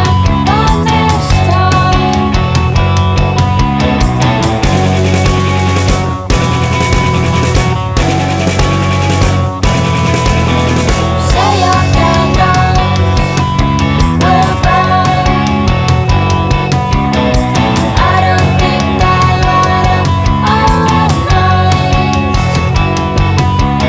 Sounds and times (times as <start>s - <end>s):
Music: 0.0s - 23.8s.